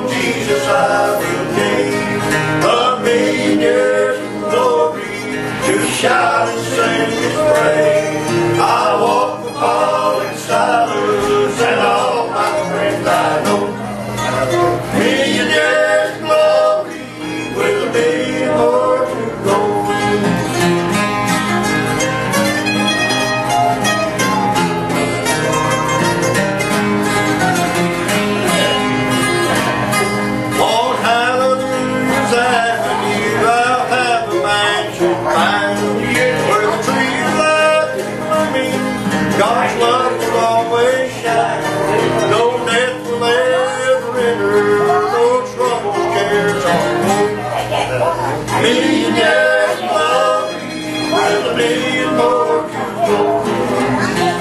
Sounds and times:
Singing: 0:00.0 - 0:20.6, 0:30.5 - 0:54.4
Acoustic guitar: 0:00.0 - 0:54.4.

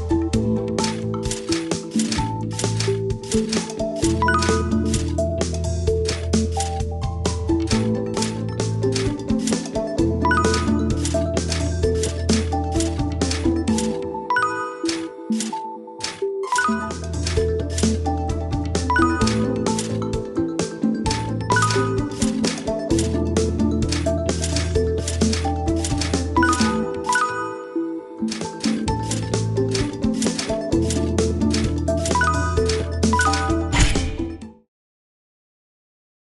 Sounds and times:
Music: 0:00.0 - 0:34.7.

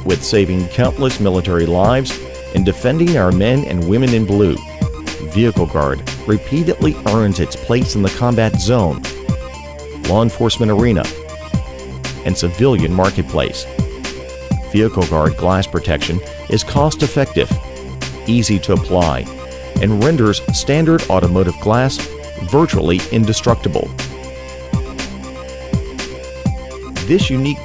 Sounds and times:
Speech: 0:00.0 - 0:04.6, 0:05.2 - 0:09.0, 0:10.1 - 0:11.1, 0:12.2 - 0:13.7, 0:14.7 - 0:17.6, 0:18.3 - 0:23.9, 0:27.0 - 0:27.6
Music: 0:00.0 - 0:27.6.

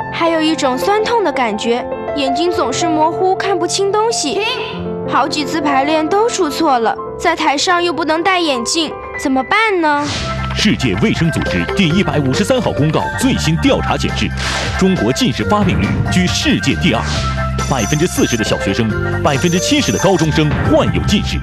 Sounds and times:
Music: 0:00.0 - 0:21.4
Speech: 0:00.2 - 0:21.4.

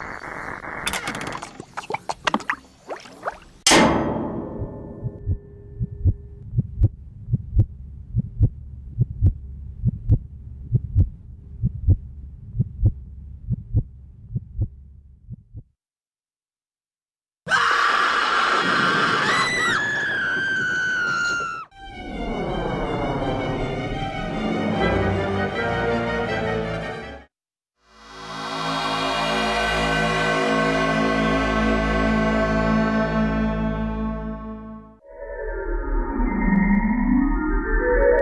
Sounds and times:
Music: 0:21.8 - 0:27.3, 0:27.9 - 0:35.0.

